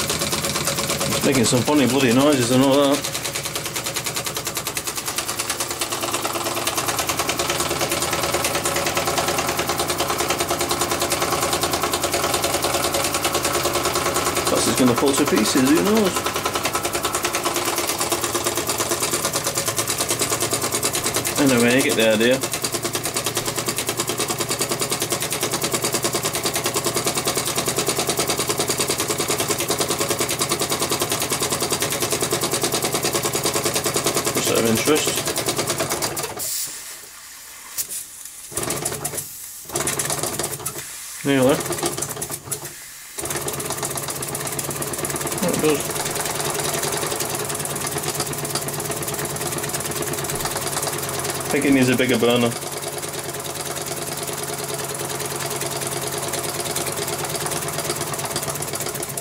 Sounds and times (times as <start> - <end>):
Hiss: 36.4 - 38.5, 39.2 - 39.7, 40.7 - 41.4, 42.6 - 43.2.